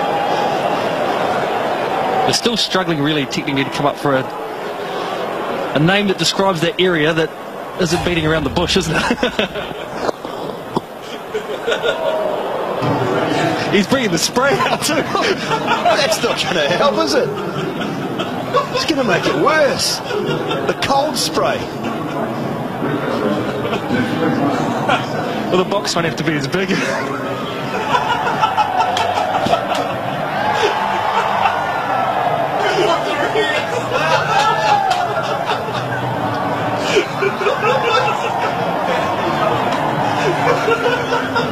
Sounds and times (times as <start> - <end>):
Speech: 2.3 - 4.3, 5.7 - 9.5, 23.4 - 27.0.